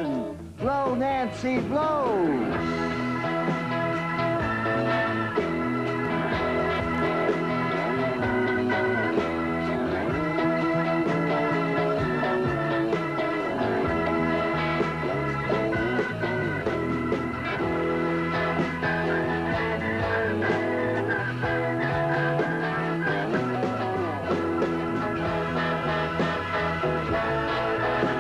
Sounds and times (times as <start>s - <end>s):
Rock and roll: 0.0s - 28.2s.